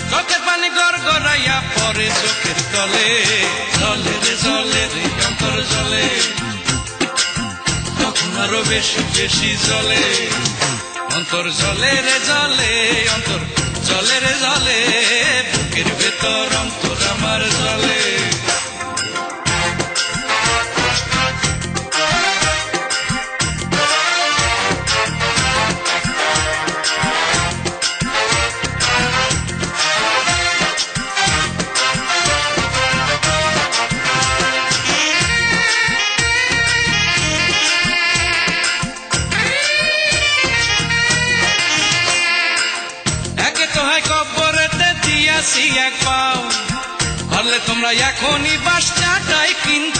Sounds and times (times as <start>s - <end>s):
Music of Bollywood: 0.0s - 49.9s.